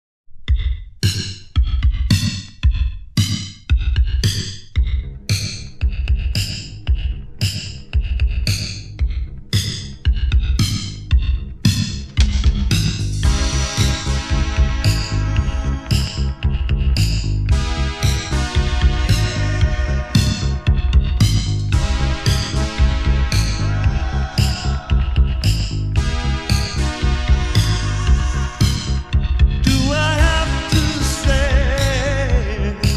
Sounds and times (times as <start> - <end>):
Music: 0.3 - 32.9.